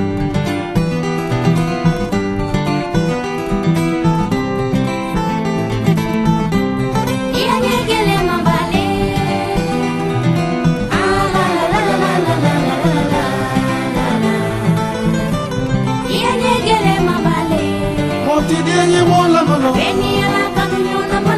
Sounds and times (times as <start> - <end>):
Guitar: 0.0 - 21.3
Singing: 7.4 - 10.2, 10.9 - 15.3, 16.0 - 21.3.